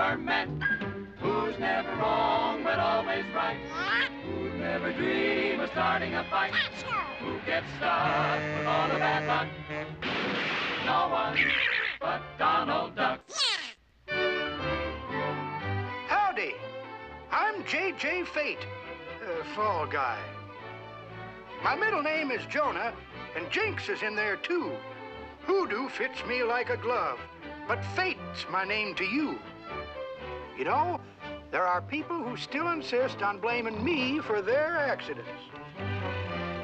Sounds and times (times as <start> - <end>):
Music: 0.0 - 13.3, 14.0 - 36.6
Speech: 16.1 - 16.6, 17.3 - 20.3, 21.6 - 24.8, 25.5 - 29.4, 30.6 - 31.0, 31.6 - 35.4.